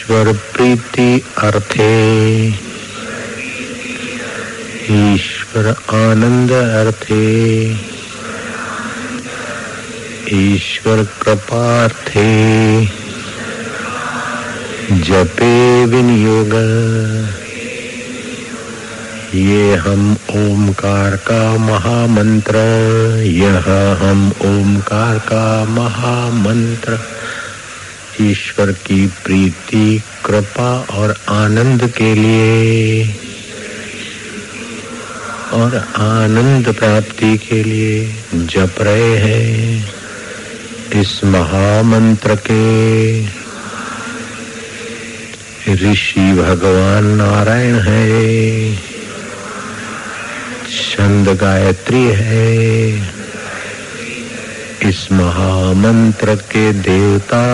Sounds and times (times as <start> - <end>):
Mantra: 0.0 - 57.5.